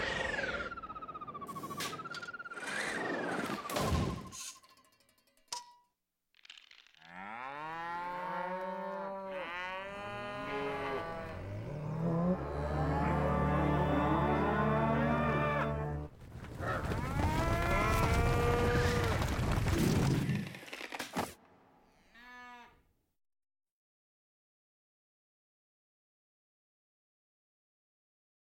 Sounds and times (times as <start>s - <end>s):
Moo: 7.0s - 15.9s, 17.0s - 19.1s, 22.0s - 22.9s.